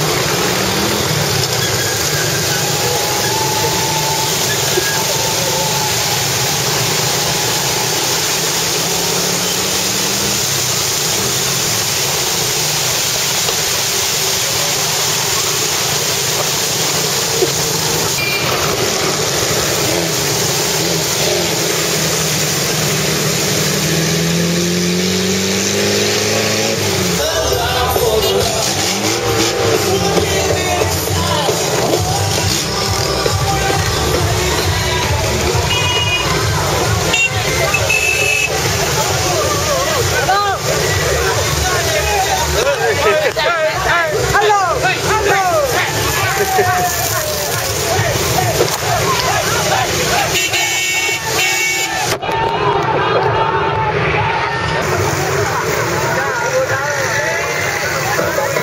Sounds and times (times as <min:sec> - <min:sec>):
Music: 0:27.0 - 0:42.6.